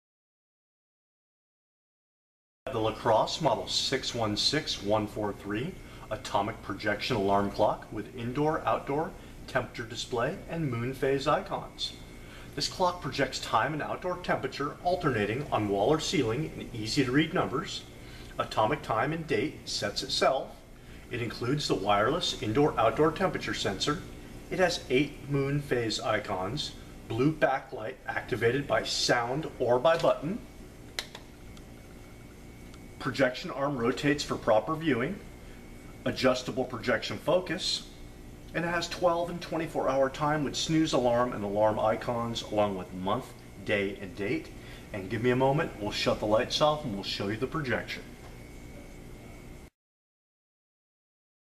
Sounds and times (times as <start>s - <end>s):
Speech: 2.7s - 12.0s, 12.6s - 30.5s, 33.0s - 35.3s, 36.0s - 48.1s.